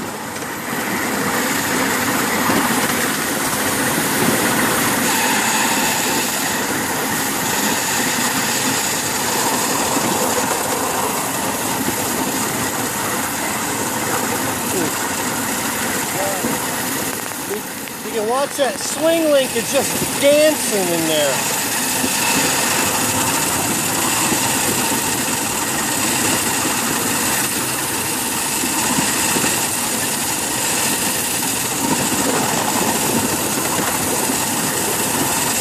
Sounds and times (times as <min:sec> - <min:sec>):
Train: 0:00.0 - 0:35.6
Speech: 0:16.1 - 0:16.6, 0:17.5 - 0:21.4.